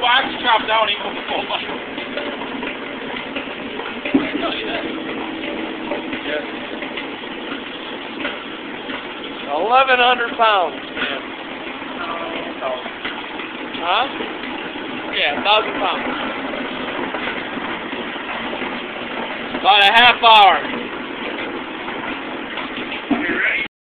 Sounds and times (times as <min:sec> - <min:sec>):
Speech: 0:00.0 - 0:01.6, 0:09.5 - 0:11.2, 0:13.8 - 0:14.2, 0:15.1 - 0:16.2, 0:19.6 - 0:20.7.